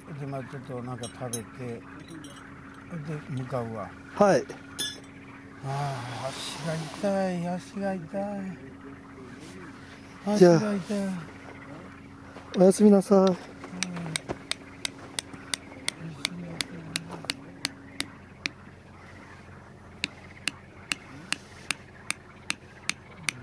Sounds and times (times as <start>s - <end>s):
Outside, rural or natural: 0.0s - 23.4s.